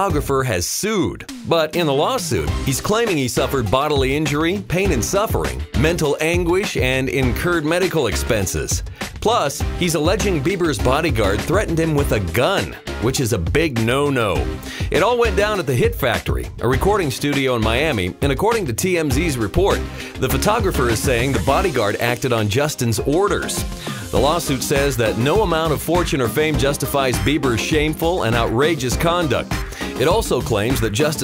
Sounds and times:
Music: 0.0 - 31.2
Speech: 0.0 - 31.2.

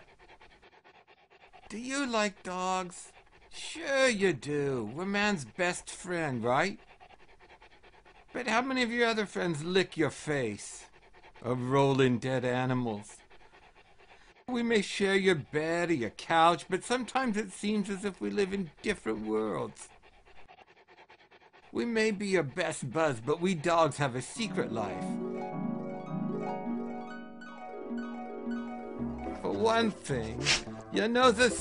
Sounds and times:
Speech: 1.7 - 6.8, 8.4 - 10.8, 11.4 - 13.2, 14.5 - 19.9, 21.8 - 25.2, 29.5 - 31.6
Music: 24.4 - 31.6.

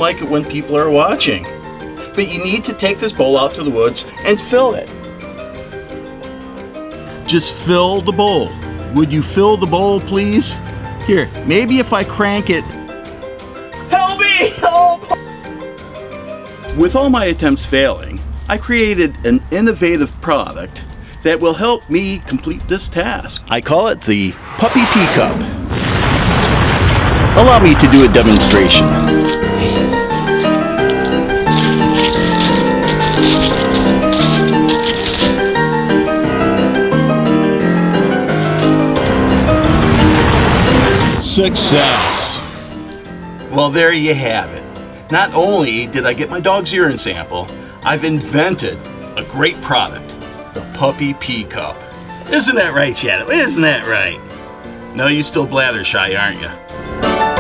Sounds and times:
Speech: 0.0 - 1.5, 2.2 - 4.9, 7.3 - 12.7, 13.9 - 15.2, 16.7 - 25.5, 27.4 - 28.9, 41.2 - 42.1, 43.5 - 50.1, 50.8 - 54.2, 55.0 - 56.6
Music: 0.0 - 57.4.

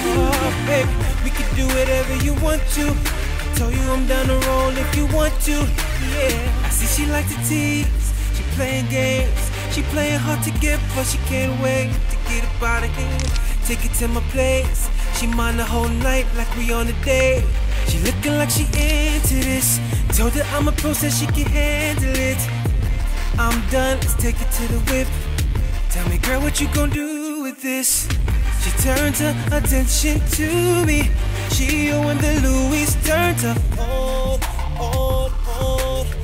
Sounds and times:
Rhythm and blues: 0.0 - 27.1, 27.8 - 36.2.

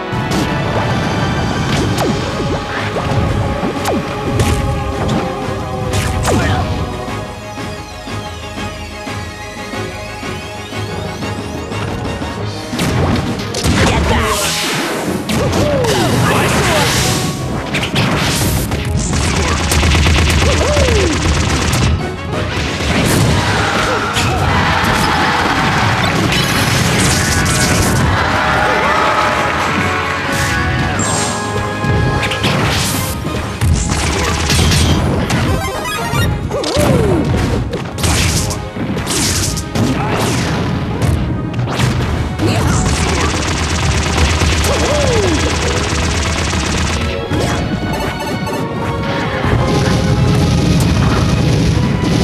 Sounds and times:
Smash, crash: 12.7 - 28.4, 32.3 - 47.7.

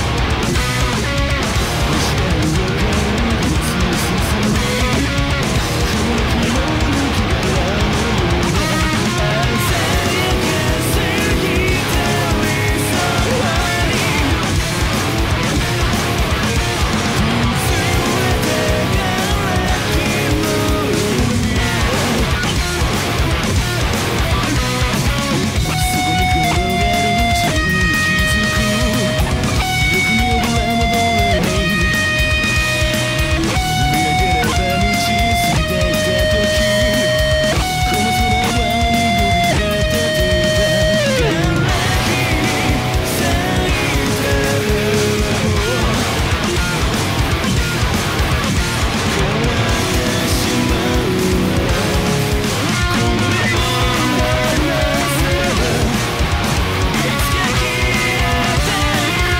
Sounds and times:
Strum: 0.0 - 59.3.

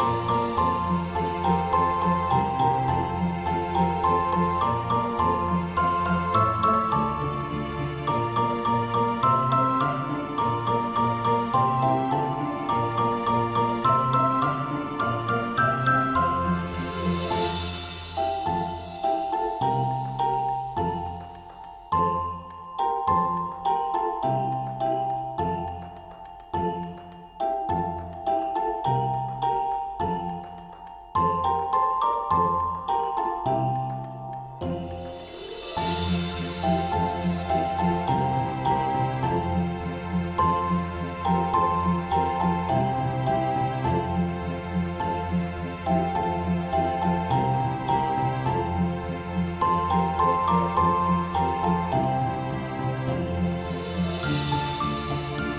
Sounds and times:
Christmas music: 0.0 - 55.5.

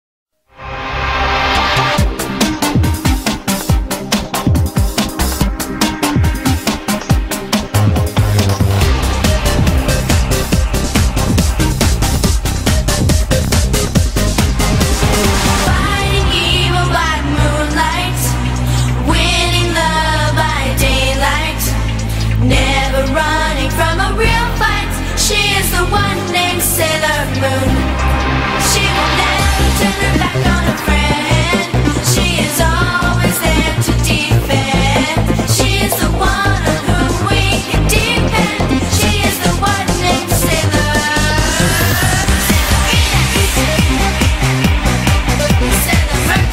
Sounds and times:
Drum and bass: 0.6 - 46.5.

